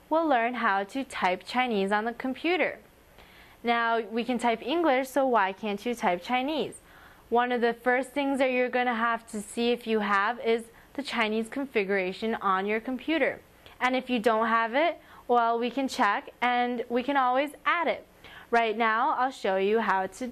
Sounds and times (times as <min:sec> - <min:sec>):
Speech: 0:00.1 - 0:02.9, 0:03.6 - 0:20.3.